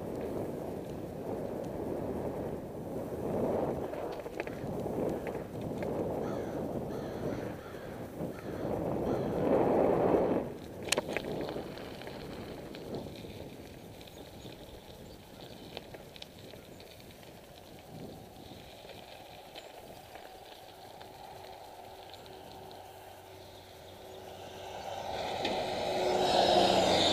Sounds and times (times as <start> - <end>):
Bicycle: 0.0 - 27.1.